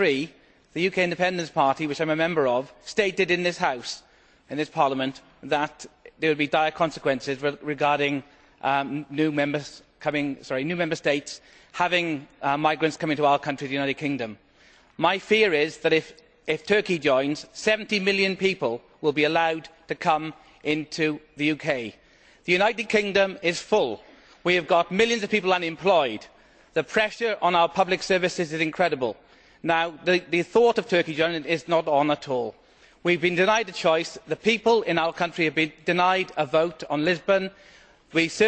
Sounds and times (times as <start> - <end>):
Speech: 0.0 - 14.4, 15.0 - 38.4.